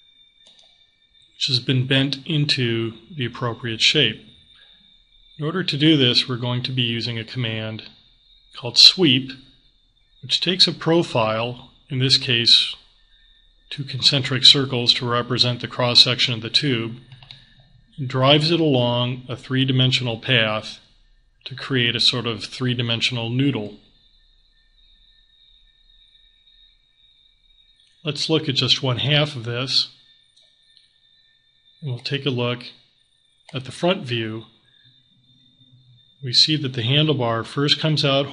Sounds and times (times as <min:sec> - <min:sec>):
Speech: 0:01.4 - 0:04.3, 0:05.4 - 0:07.9, 0:08.6 - 0:09.4, 0:10.3 - 0:12.8, 0:13.7 - 0:17.1, 0:18.0 - 0:20.8, 0:21.5 - 0:23.8, 0:28.1 - 0:29.9, 0:31.8 - 0:32.8, 0:33.6 - 0:34.5, 0:36.2 - 0:38.3.